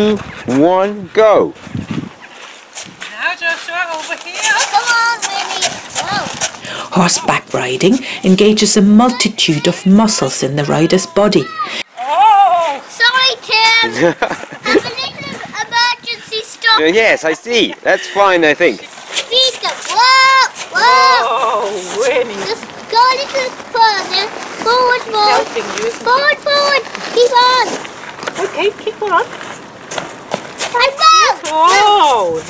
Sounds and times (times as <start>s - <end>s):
Child speech, kid speaking: 3.2s - 6.5s, 8.8s - 17.2s, 19.1s - 29.3s, 30.6s - 32.4s.